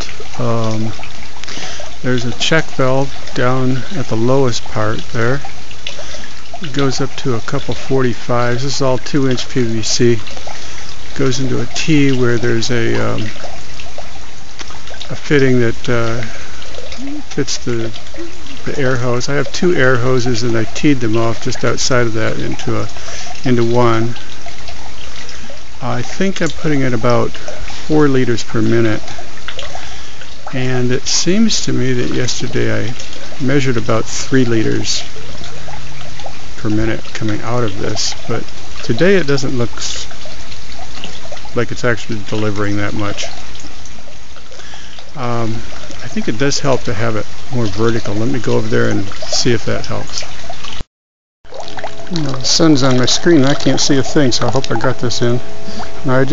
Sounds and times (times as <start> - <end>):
Water tap, faucet: 0.0 - 50.9, 51.5 - 56.3
Water: 0.0 - 56.3.